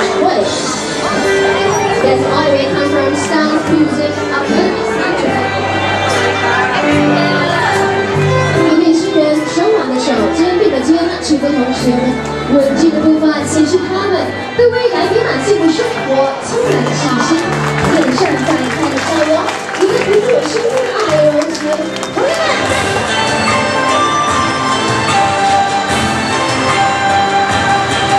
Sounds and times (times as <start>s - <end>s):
Speech: 0.0s - 0.8s, 2.0s - 5.6s, 8.6s - 22.7s
Violin, fiddle: 0.7s - 18.9s.